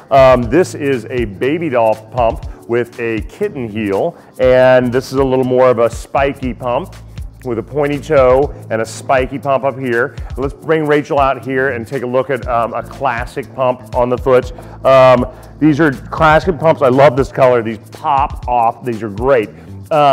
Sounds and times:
Music: 0.0s - 20.1s
Speech: 0.1s - 20.1s.

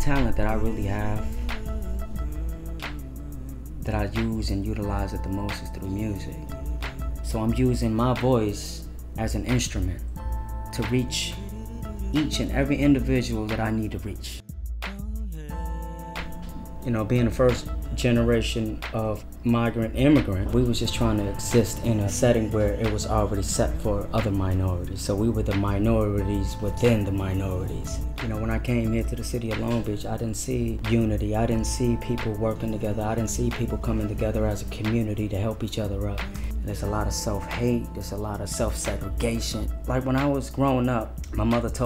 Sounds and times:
Speech: 0.0s - 1.4s, 3.8s - 6.6s, 7.2s - 10.1s, 10.7s - 14.4s, 16.8s - 41.8s
Music: 0.0s - 41.8s.

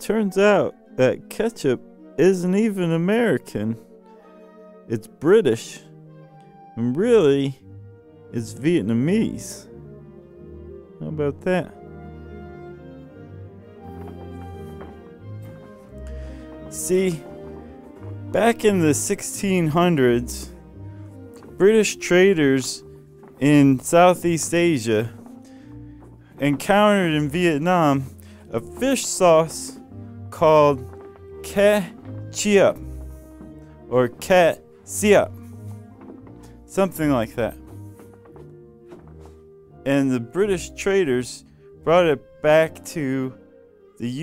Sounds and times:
Speech: 0.0s - 3.8s, 4.9s - 5.9s, 6.8s - 7.6s, 8.4s - 9.7s, 11.0s - 11.8s, 16.7s - 17.3s, 18.3s - 20.5s, 21.6s - 22.8s, 23.4s - 25.2s, 26.4s - 32.8s, 33.9s - 35.4s, 36.7s - 37.6s, 39.9s - 43.4s
Music: 0.0s - 44.2s.

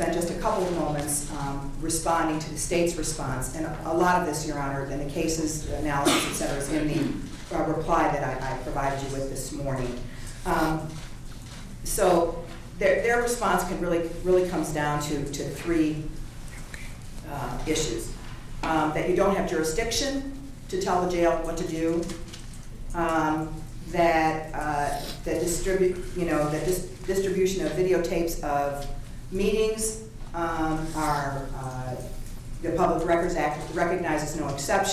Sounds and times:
Speech: 0.0s - 11.0s, 11.8s - 16.2s, 17.2s - 22.2s, 23.0s - 34.9s.

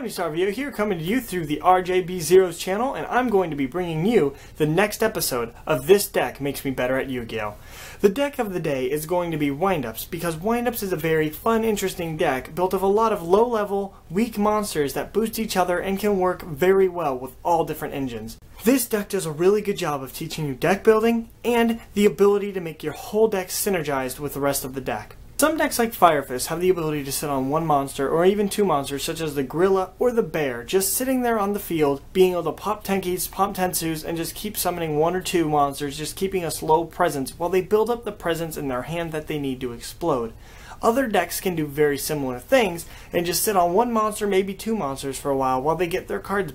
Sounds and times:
Speech: 0.0s - 46.5s.

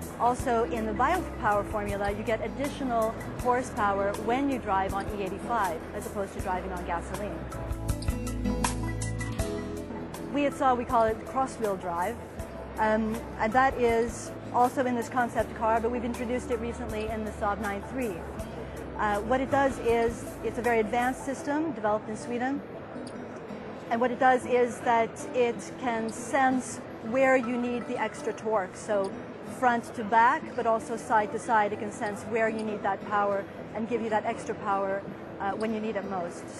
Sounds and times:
Music: 0.0s - 36.5s
Speech: 0.2s - 7.4s, 10.4s - 12.2s, 12.8s - 18.3s, 19.0s - 22.6s, 23.9s - 36.5s.

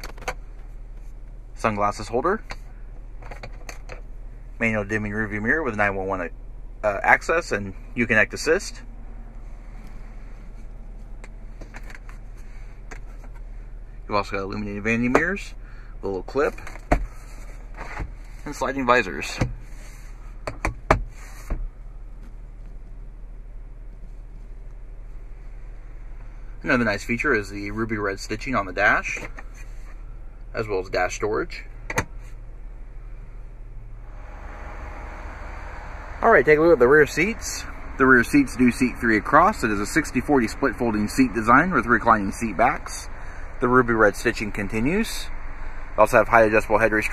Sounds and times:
Outside, rural or natural: 0.0s - 47.1s
Speech: 1.6s - 2.5s, 4.6s - 8.8s, 14.1s - 16.6s, 18.4s - 19.5s, 26.6s - 29.3s, 30.5s - 31.7s, 36.2s - 45.3s, 46.0s - 47.1s.

